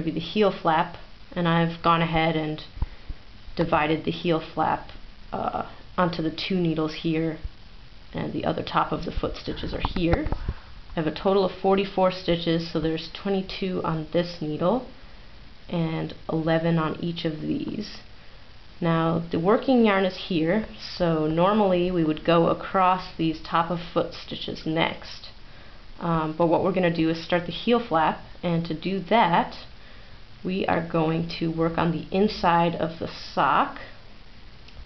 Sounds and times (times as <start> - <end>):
Speech: 0.0 - 2.7, 3.6 - 7.5, 8.1 - 10.4, 11.0 - 14.9, 15.7 - 18.1, 18.8 - 25.4, 26.0 - 29.7, 30.4 - 34.0.